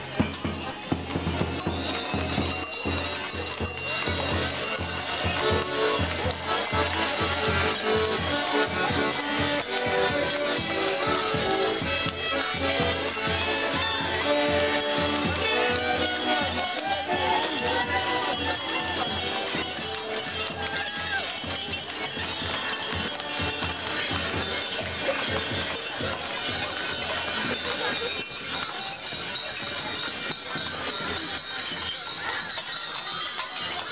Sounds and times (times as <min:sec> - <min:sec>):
Music: 0:00.0 - 0:33.9
Speech: 0:00.0 - 0:33.9.